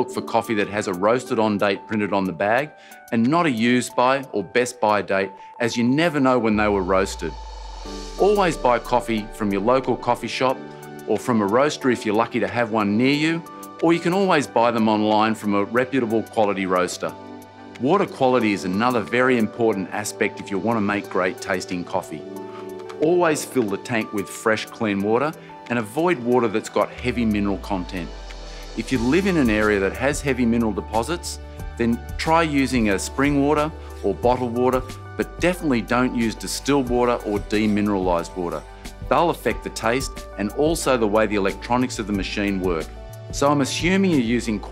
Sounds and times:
Speech: 0.0 - 7.4, 8.2 - 17.1, 17.8 - 22.2, 23.0 - 28.1, 28.8 - 44.7
Music: 0.0 - 44.7.

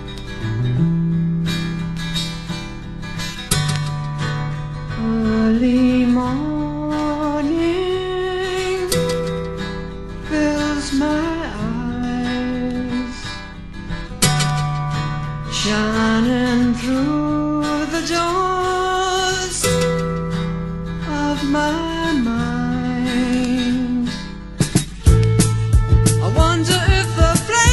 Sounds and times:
Music: 0.0 - 27.7.

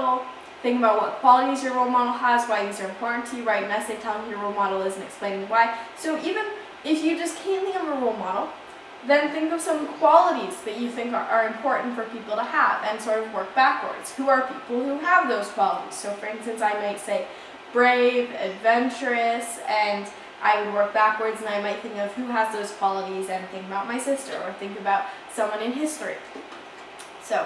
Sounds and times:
Speech: 0.0 - 26.3, 27.2 - 27.4.

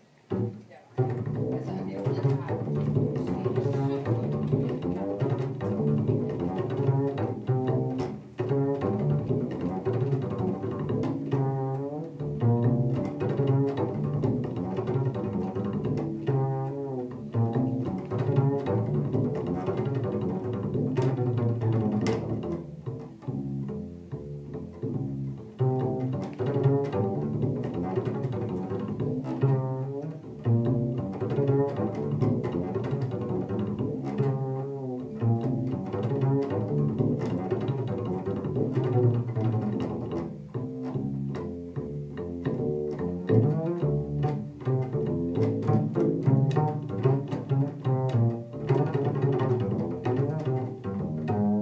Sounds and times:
Double bass: 0.0 - 51.6.

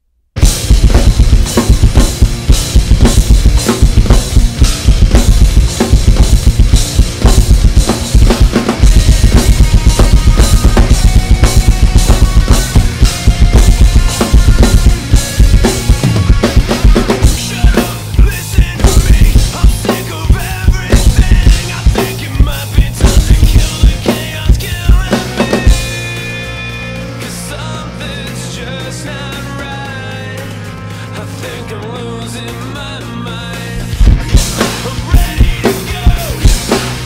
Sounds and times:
Drum: 0.4 - 27.5, 32.0 - 37.0
Drum kit: 0.4 - 37.0.

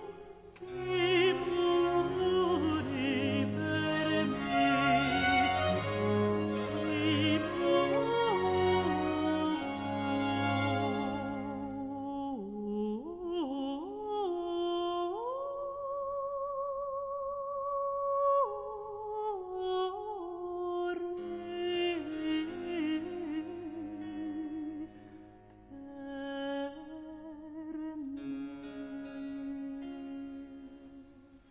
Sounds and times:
Opera: 0.0 - 31.1.

